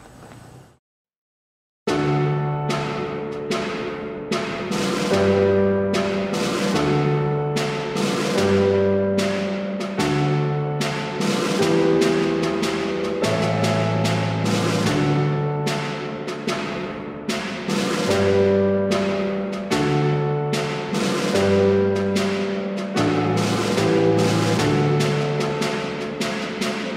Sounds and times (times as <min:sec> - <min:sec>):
Timpani: 0:01.9 - 0:26.9.